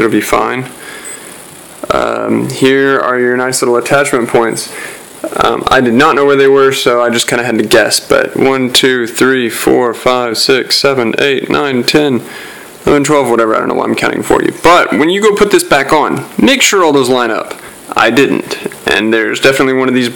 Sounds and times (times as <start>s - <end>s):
Speech: 0.0s - 0.8s, 1.8s - 20.1s.